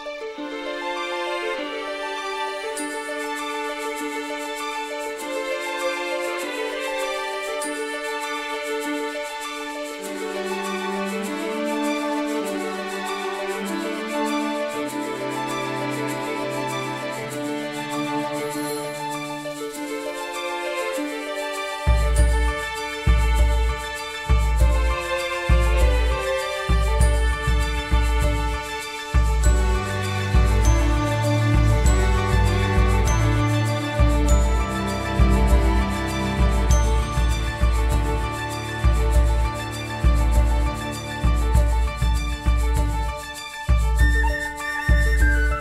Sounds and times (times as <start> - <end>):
Music: 0.0 - 45.6.